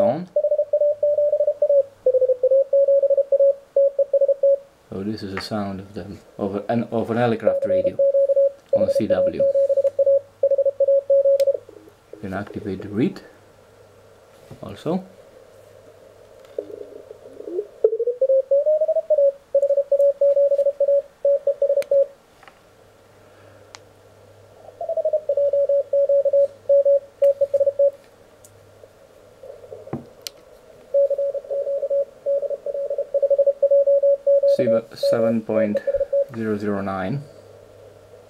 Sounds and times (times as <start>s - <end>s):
Speech: 0.0s - 0.3s, 4.9s - 8.0s, 8.8s - 9.5s, 12.2s - 13.4s, 14.6s - 15.1s, 34.5s - 37.3s
Radio: 34.6s - 37.2s.